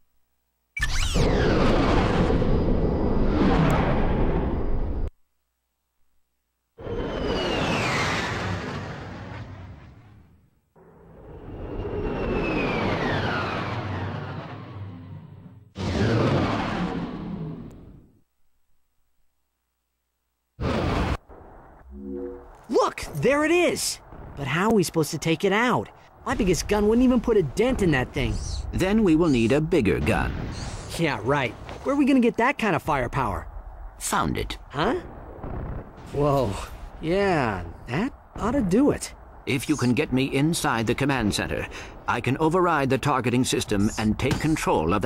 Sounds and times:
Speech: 22.7 - 30.3, 30.9 - 35.1, 36.1 - 45.0.

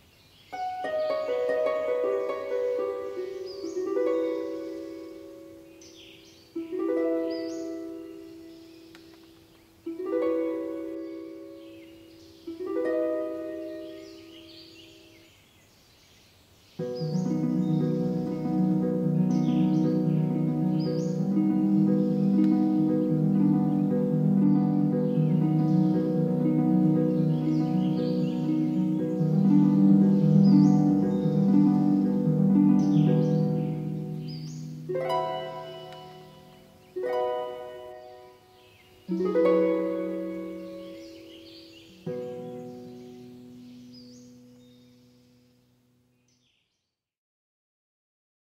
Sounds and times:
Music: 0.6 - 9.1, 9.9 - 14.6, 16.8 - 45.6.

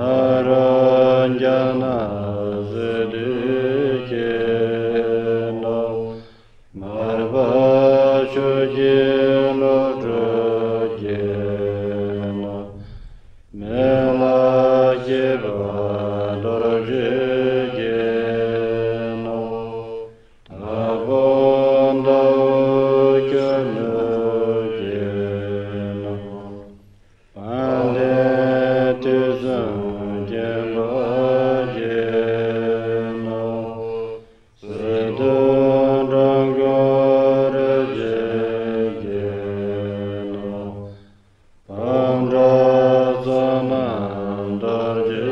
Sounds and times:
Mantra: 0.0 - 41.1, 41.7 - 45.3.

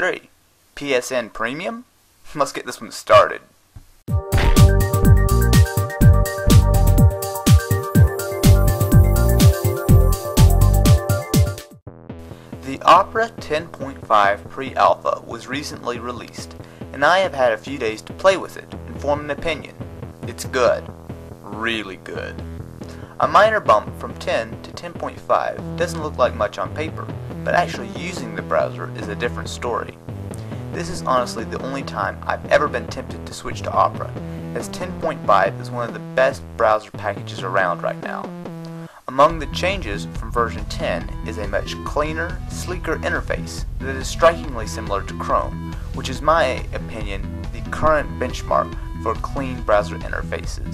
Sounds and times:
Speech: 0.0 - 3.5, 12.6 - 22.4, 23.2 - 30.0, 30.8 - 38.3, 39.1 - 50.7
Music: 4.1 - 50.7.

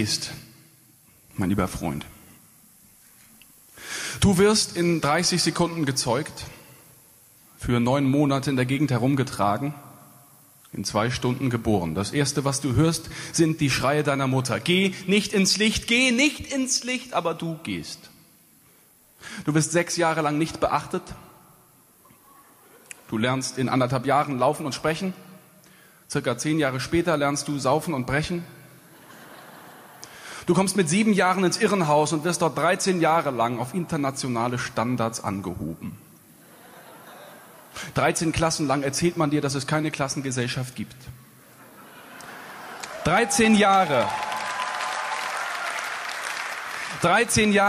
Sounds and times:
Speech: 0.0 - 0.4, 1.4 - 2.2, 4.2 - 6.6, 7.6 - 9.9, 10.7 - 18.2, 19.4 - 21.3, 22.2 - 25.2, 26.1 - 28.6, 30.5 - 36.0, 37.9 - 41.2, 43.0 - 44.2, 47.0 - 47.6.

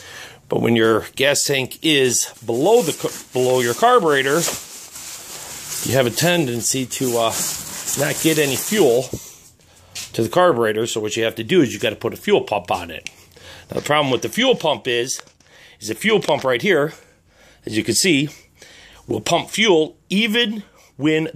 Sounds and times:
Speech: 0.5 - 4.6, 5.8 - 9.2, 10.1 - 13.1, 13.7 - 17.0, 17.6 - 18.4, 19.1 - 21.3.

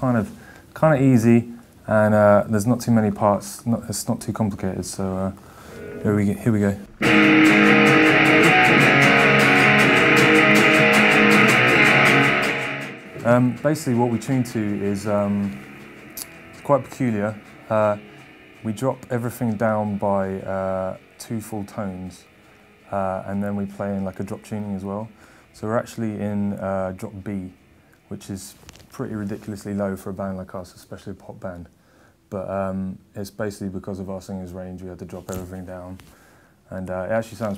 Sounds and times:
Speech: 0.0 - 5.4, 6.0 - 7.0, 13.2 - 15.6, 16.6 - 18.0, 18.6 - 22.3, 22.9 - 31.7, 32.3 - 36.1, 36.7 - 37.5
Music: 5.6 - 29.7.

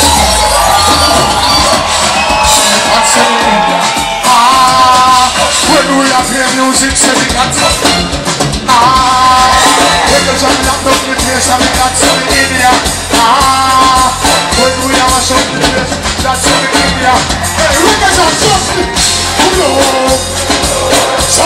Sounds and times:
Maraca: 0.0 - 21.4.

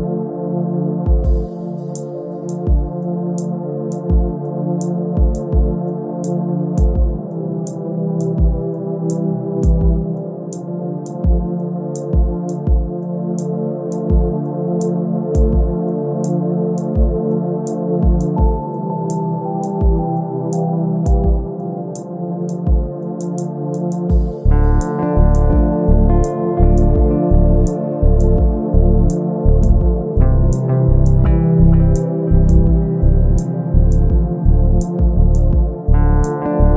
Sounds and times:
Tender music: 0.0 - 36.7.

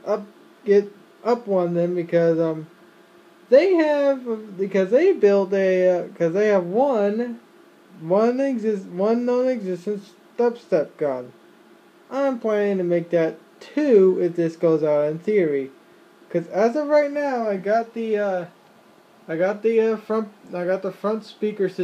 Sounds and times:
Speech: 0.0 - 2.7, 3.5 - 7.4, 8.0 - 11.4, 12.1 - 18.6, 19.3 - 21.8.

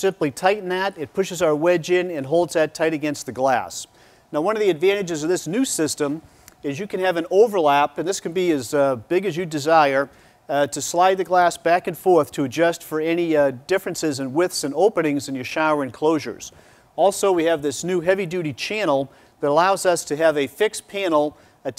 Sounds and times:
Speech: 0.0 - 21.7.

